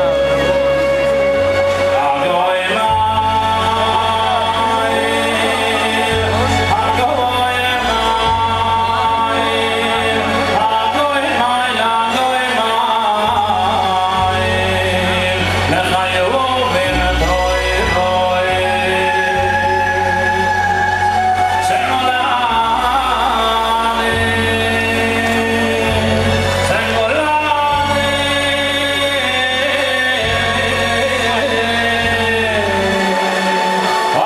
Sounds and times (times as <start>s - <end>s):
Singing: 0.0s - 34.2s.